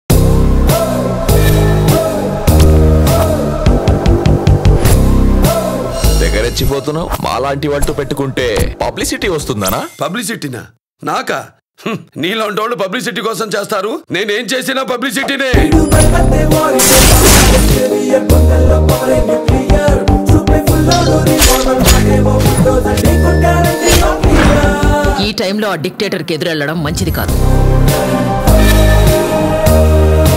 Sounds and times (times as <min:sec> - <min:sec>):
Music: 0:00.1 - 0:09.4, 0:15.5 - 0:30.3
Speech: 0:06.2 - 0:15.6.